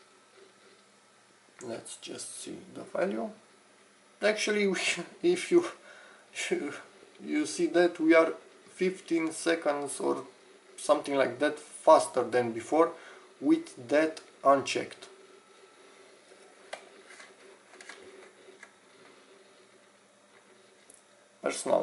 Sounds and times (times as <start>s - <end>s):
Inside, small room: 0.0s - 21.8s
Speech: 1.6s - 3.4s, 4.2s - 5.8s, 6.4s - 15.2s, 21.4s - 21.8s.